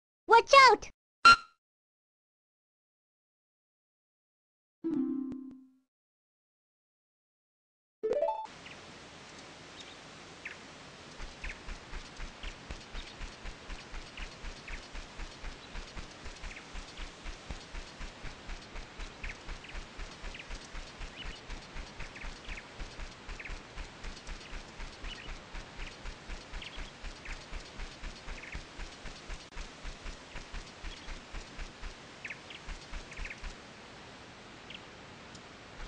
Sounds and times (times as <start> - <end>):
Music: 4.9 - 5.8
Outside, rural or natural: 8.1 - 35.8.